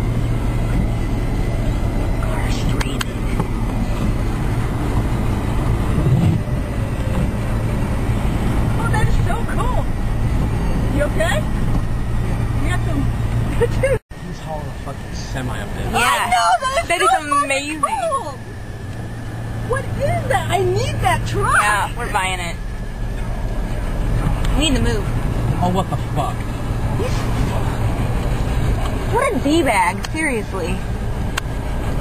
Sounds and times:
Vehicle: 0:00.0 - 0:32.0.

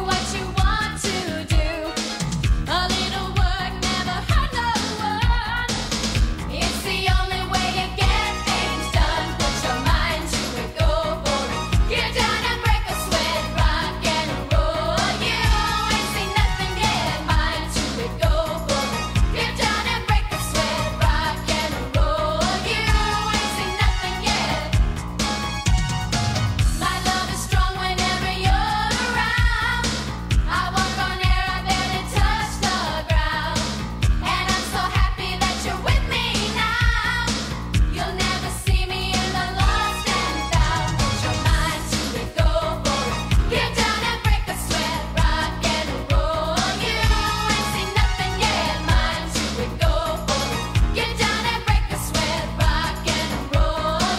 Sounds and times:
Music: 0:00.0 - 0:54.1.

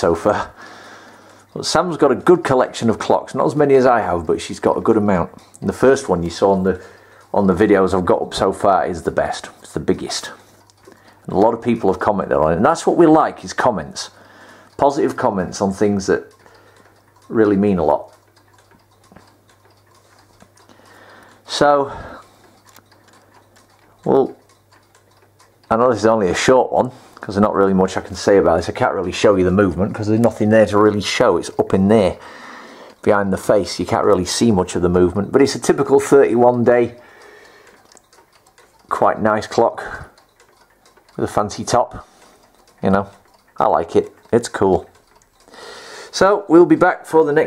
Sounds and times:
Speech: 0:00.0 - 0:00.6, 0:01.6 - 0:10.4, 0:11.3 - 0:14.2, 0:14.8 - 0:16.3, 0:17.3 - 0:18.2, 0:21.5 - 0:22.2, 0:24.0 - 0:24.4, 0:25.7 - 0:32.2, 0:33.0 - 0:37.0, 0:38.9 - 0:40.2, 0:41.2 - 0:42.1, 0:42.8 - 0:44.9, 0:46.1 - 0:47.4
Clock: 0:00.0 - 0:47.4.

